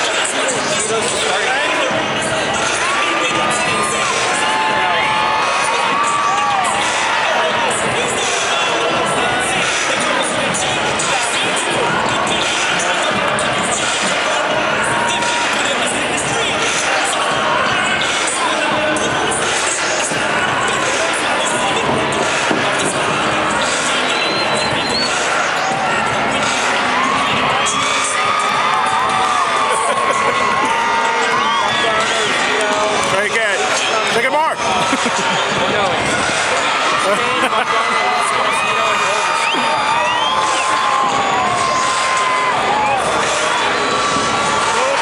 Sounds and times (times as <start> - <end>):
Music: 0.0 - 45.0.